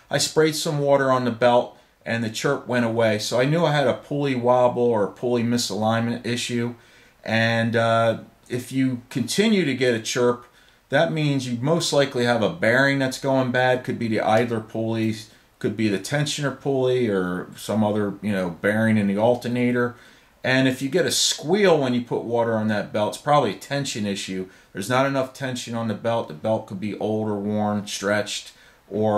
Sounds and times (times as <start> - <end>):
Speech: 0.0 - 29.1.